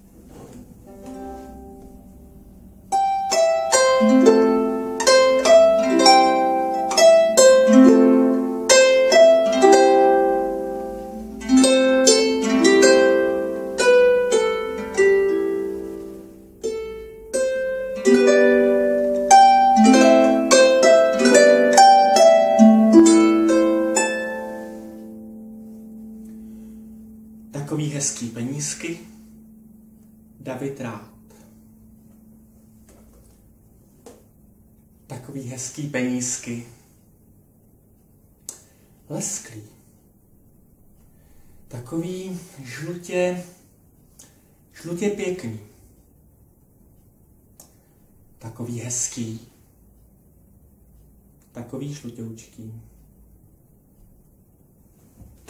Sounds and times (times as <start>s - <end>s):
Pizzicato: 0.0s - 34.7s
Harp: 0.3s - 34.4s.